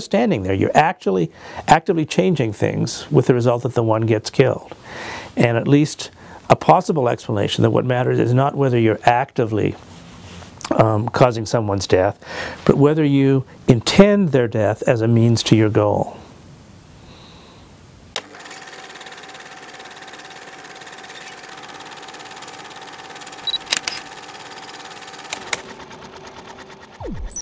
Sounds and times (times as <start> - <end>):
Speech: 0.0 - 4.7, 5.4 - 9.8, 10.6 - 16.3.